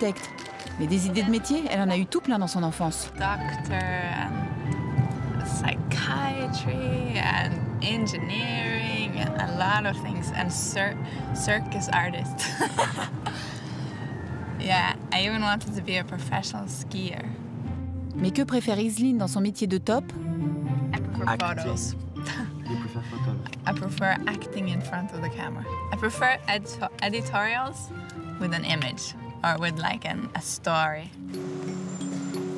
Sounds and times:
Music: 0.0s - 32.5s
Speech: 0.8s - 4.2s, 21.0s - 21.9s.

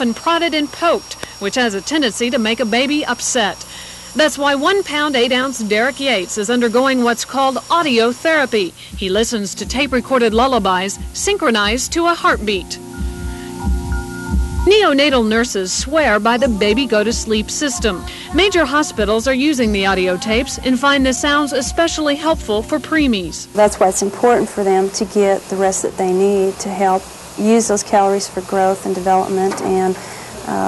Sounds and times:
Speech: 0.0s - 3.6s, 4.2s - 12.8s, 14.7s - 30.6s
Music: 8.8s - 26.8s.

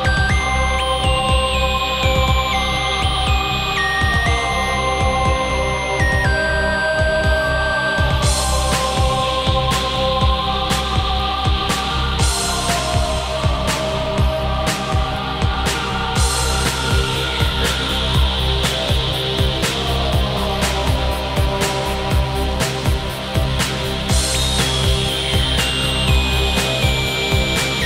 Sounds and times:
Electronica: 0.0s - 27.8s.

